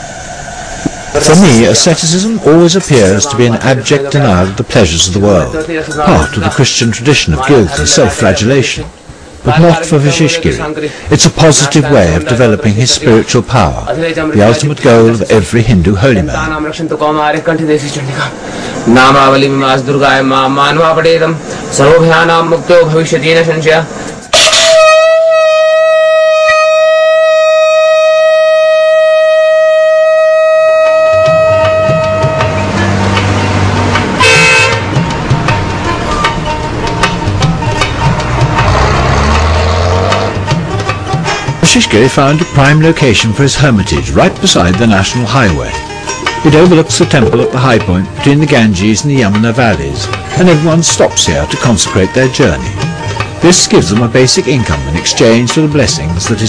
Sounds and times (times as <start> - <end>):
Outside, rural or natural: 0.0 - 44.5
Music: 30.7 - 56.4.